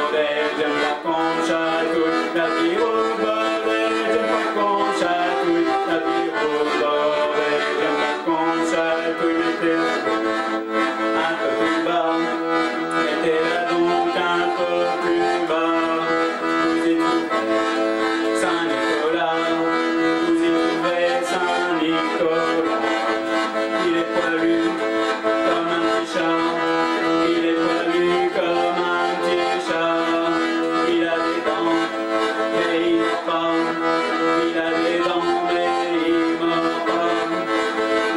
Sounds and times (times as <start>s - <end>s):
Accordion: 0.0s - 38.1s.